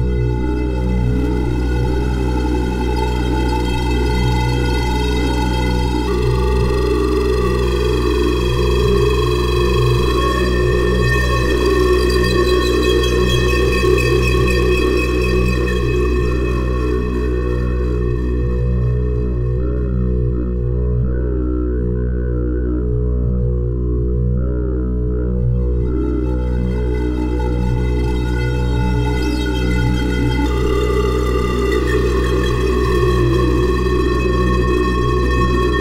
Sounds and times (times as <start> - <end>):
Synthesizer: 0.0 - 35.8.